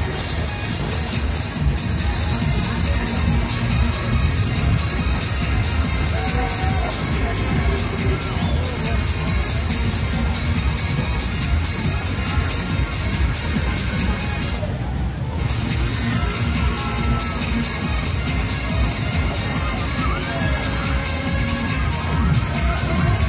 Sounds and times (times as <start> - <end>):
Music: 0.0 - 23.2
Speech: 0.0 - 23.2.